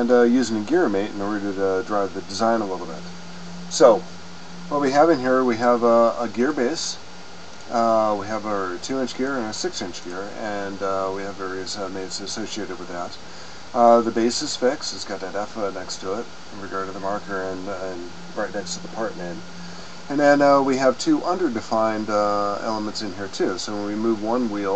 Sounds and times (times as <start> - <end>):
Speech: 0.0 - 3.1, 3.7 - 4.1, 4.7 - 7.0, 7.7 - 13.2, 13.8 - 19.4, 20.1 - 24.7.